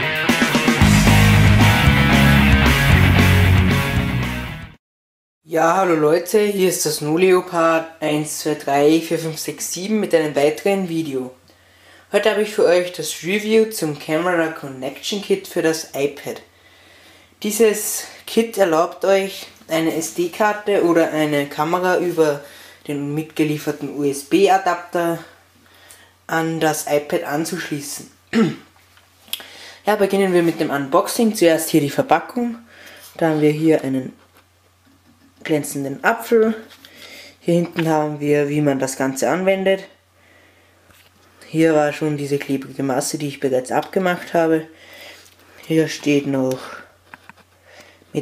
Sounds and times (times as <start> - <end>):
Speech: 5.5 - 11.4, 12.1 - 16.5, 17.4 - 25.4, 26.3 - 28.7, 29.9 - 34.2, 35.4 - 36.8, 37.4 - 40.0, 41.4 - 44.8, 45.7 - 47.0.